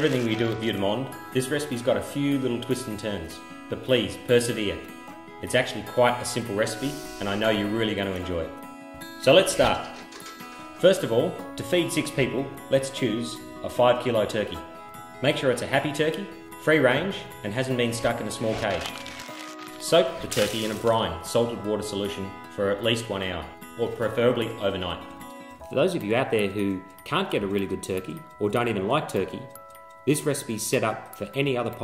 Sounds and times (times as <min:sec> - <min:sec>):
Speech: 0:00.0 - 0:08.5, 0:09.2 - 0:09.9, 0:10.8 - 0:14.6, 0:15.2 - 0:19.0, 0:19.8 - 0:25.0, 0:25.7 - 0:29.5, 0:30.1 - 0:31.8
Music: 0:00.0 - 0:31.8.